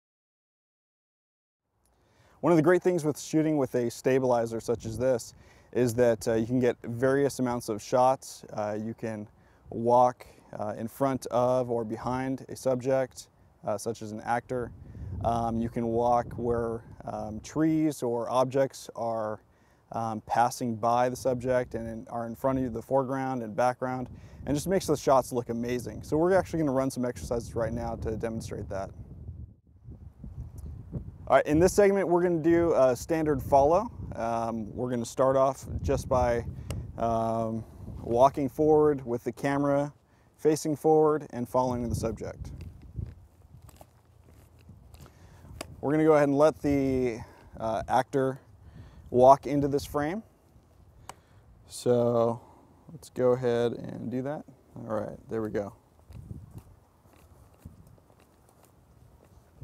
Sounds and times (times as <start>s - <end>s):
Speech: 2.4s - 29.0s, 31.3s - 42.6s, 45.8s - 48.4s, 49.1s - 50.2s, 51.7s - 55.8s.